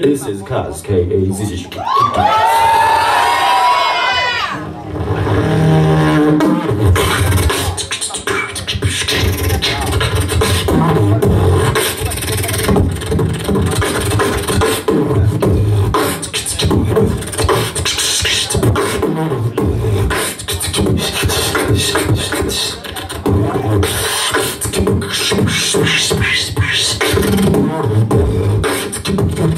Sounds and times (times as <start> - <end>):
Beatboxing: 0.0 - 2.8, 4.6 - 29.5.